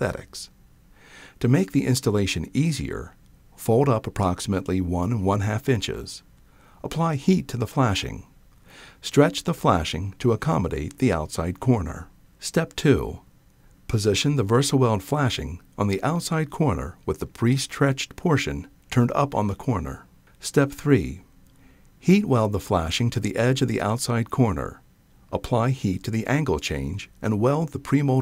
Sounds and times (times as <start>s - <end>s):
Speech: 0.0s - 0.6s, 1.4s - 8.4s, 9.0s - 13.3s, 13.9s - 21.3s, 22.0s - 28.2s.